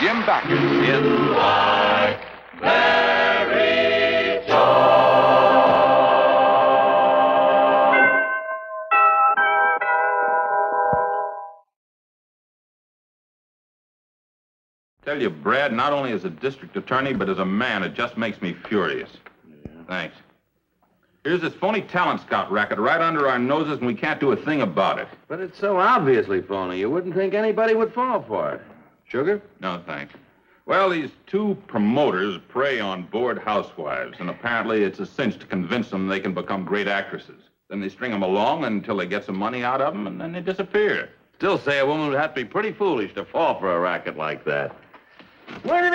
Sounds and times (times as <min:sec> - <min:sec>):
Speech: 0:00.0 - 0:01.2, 0:15.0 - 0:20.3, 0:21.3 - 0:44.8, 0:45.6 - 0:45.9
Music: 0:00.5 - 0:11.7.